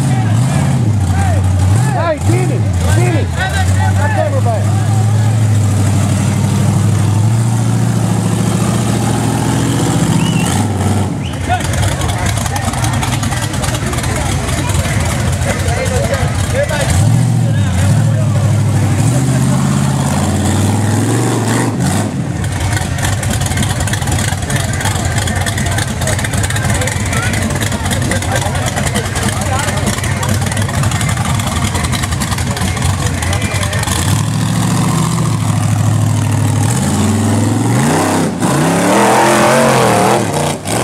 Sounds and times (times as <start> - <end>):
Speech: 0.0 - 5.6, 11.4 - 20.0, 23.2 - 34.1
Vehicle: 0.0 - 40.8.